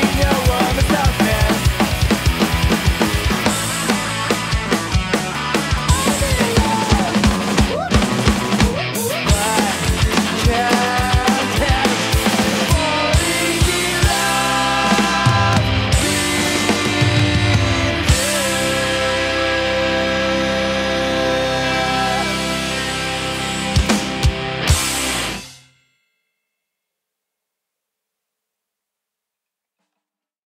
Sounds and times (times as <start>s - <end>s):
Drum kit: 0.0s - 25.7s.